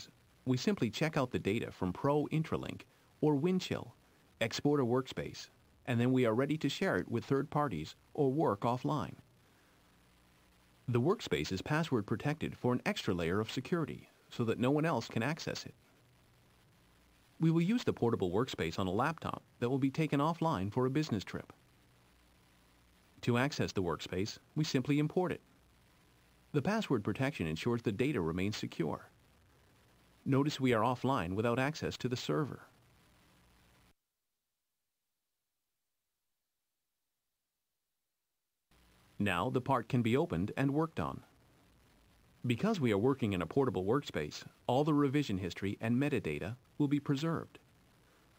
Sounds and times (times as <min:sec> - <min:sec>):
Speech: 0:00.0 - 0:09.2, 0:10.9 - 0:15.8, 0:17.4 - 0:21.6, 0:23.2 - 0:25.4, 0:26.5 - 0:29.1, 0:30.2 - 0:32.7, 0:39.2 - 0:41.3, 0:42.4 - 0:47.6.